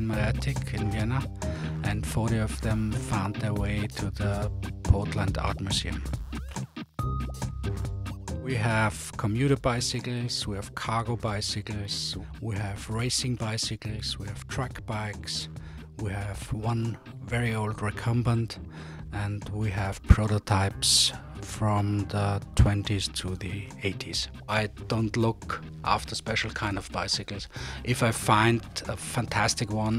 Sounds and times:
Speech: 0.0s - 6.1s, 8.4s - 29.9s
Music: 0.0s - 29.9s.

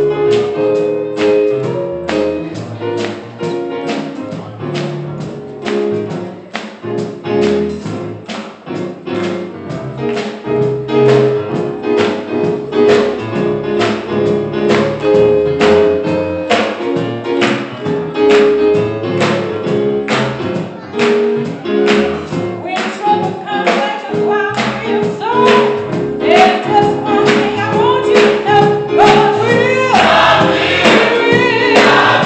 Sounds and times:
Female singing: 22.7s - 30.0s
Choir: 29.0s - 32.2s.

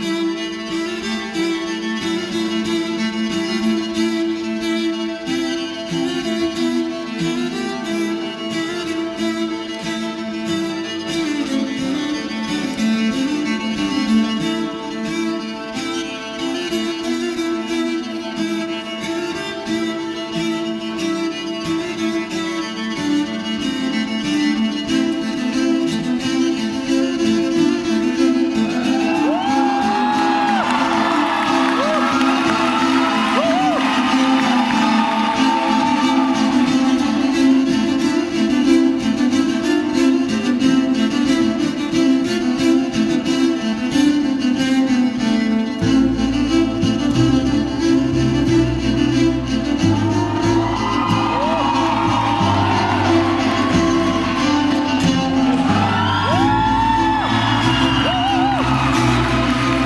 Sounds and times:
Violin, fiddle: 0.0s - 59.8s.

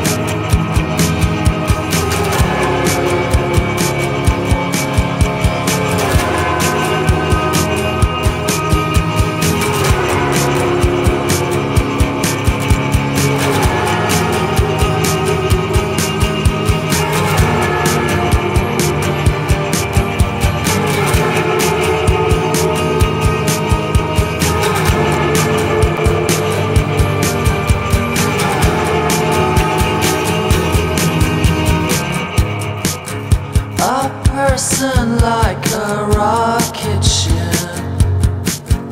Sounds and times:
Music: 0.0s - 38.9s.

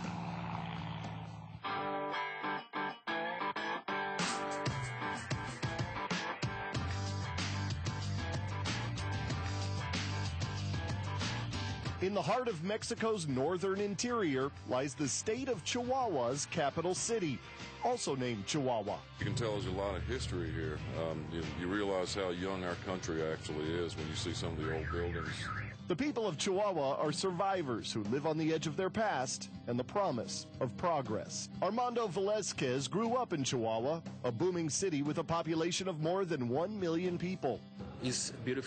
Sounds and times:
Music: 0.0s - 38.6s
Speech: 12.0s - 38.6s.

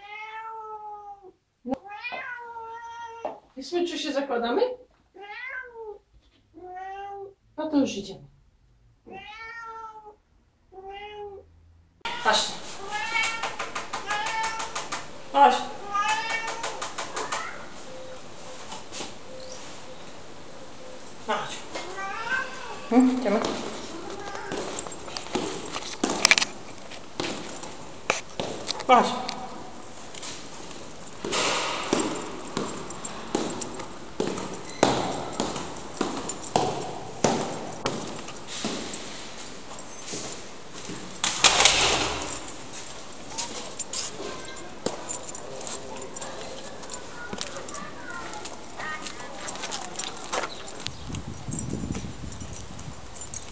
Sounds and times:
Speech: 3.6s - 4.9s, 7.6s - 8.3s, 12.1s - 12.7s, 15.3s - 15.8s, 21.3s - 21.8s, 28.8s - 29.5s, 45.4s - 50.3s
Walk, footsteps: 12.1s - 20.8s, 21.5s - 29.4s, 30.0s - 41.4s, 42.7s - 52.1s.

